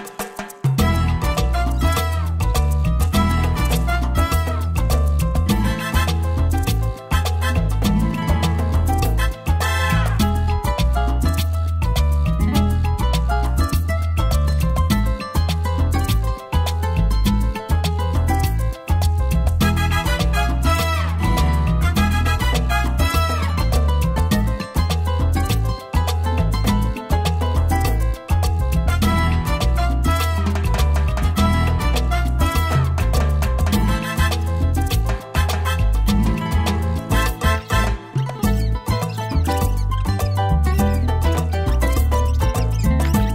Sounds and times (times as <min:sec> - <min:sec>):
Music: 0:00.0 - 0:43.3.